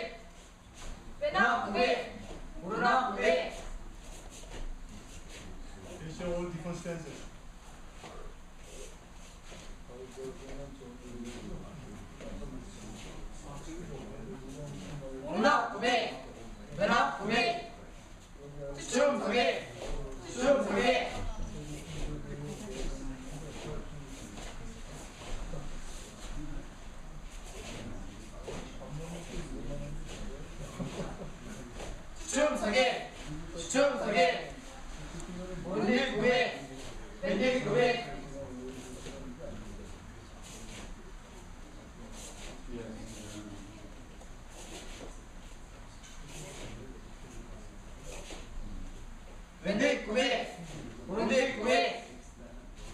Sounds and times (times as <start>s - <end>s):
Speech: 9.9s - 44.2s, 49.6s - 52.9s.